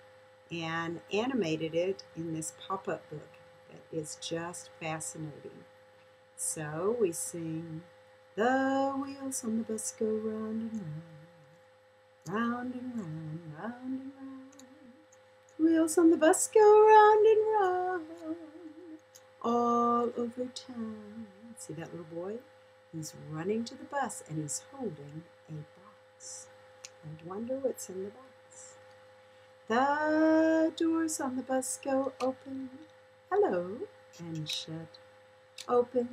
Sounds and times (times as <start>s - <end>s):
Speech: 0.5s - 5.6s, 6.4s - 7.8s, 8.4s - 11.3s, 12.3s - 14.6s, 15.6s - 18.5s, 19.4s - 22.4s, 23.0s - 28.7s, 29.7s - 34.9s, 35.6s - 36.1s.